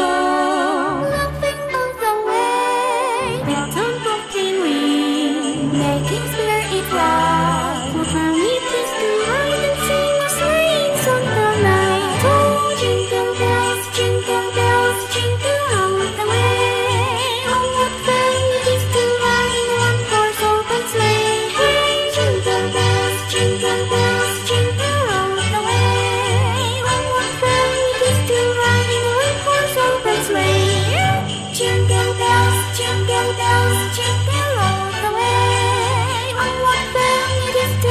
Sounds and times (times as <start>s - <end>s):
Jingle (music): 0.0s - 37.9s.